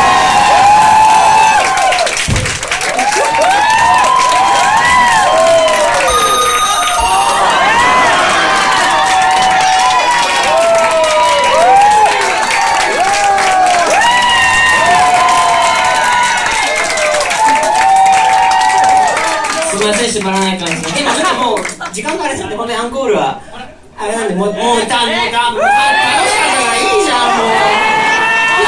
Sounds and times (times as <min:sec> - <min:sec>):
Speech: 0:19.6 - 0:27.8.